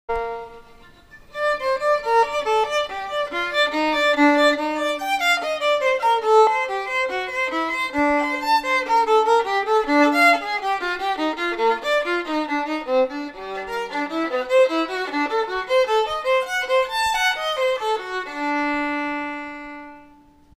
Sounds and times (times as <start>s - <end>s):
Violin, fiddle: 0.1s - 20.5s.